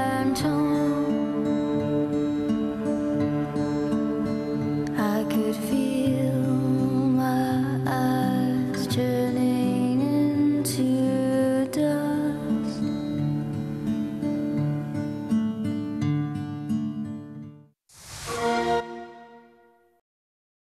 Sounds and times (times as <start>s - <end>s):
Music: 0.0s - 20.0s.